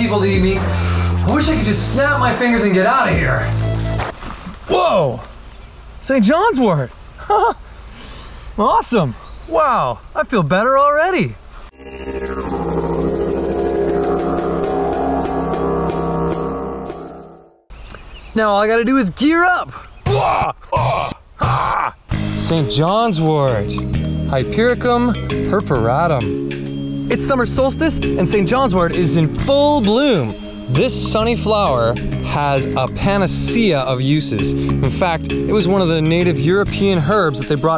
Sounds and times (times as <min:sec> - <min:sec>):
Speech: 0:00.0 - 0:03.5, 0:04.7 - 0:05.2, 0:06.0 - 0:06.9, 0:08.6 - 0:11.4, 0:18.3 - 0:20.4, 0:22.4 - 0:26.3, 0:27.1 - 0:37.7
Music: 0:00.0 - 0:04.1, 0:11.8 - 0:17.7, 0:22.1 - 0:37.7.